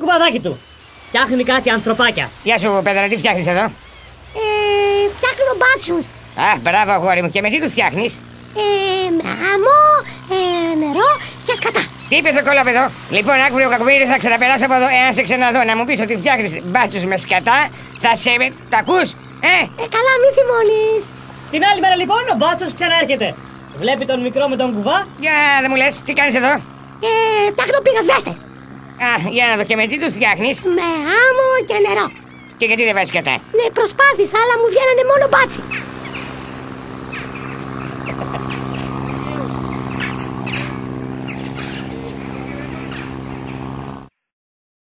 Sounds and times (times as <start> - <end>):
Speech: 0.0 - 3.8, 4.4 - 28.4, 29.0 - 35.6, 41.9 - 43.1.